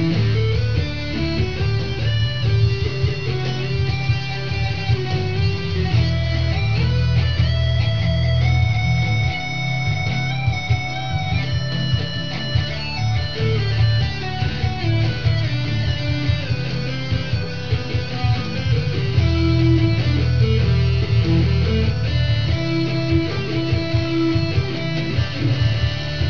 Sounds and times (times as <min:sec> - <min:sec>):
Guitar: 0:00.0 - 0:26.3.